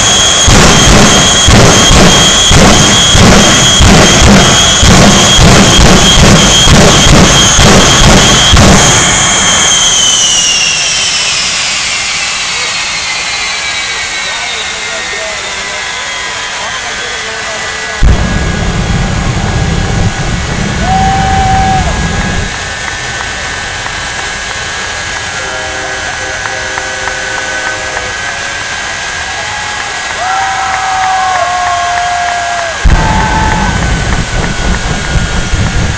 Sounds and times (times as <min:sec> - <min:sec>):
Wind noise (microphone): 0:18.2 - 0:22.6, 0:32.9 - 0:35.9.